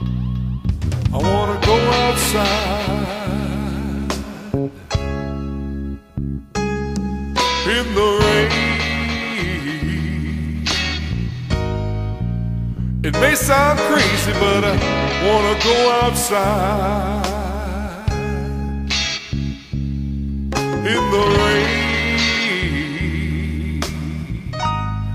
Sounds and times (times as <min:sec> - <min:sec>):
Music: 0:00.0 - 0:25.1.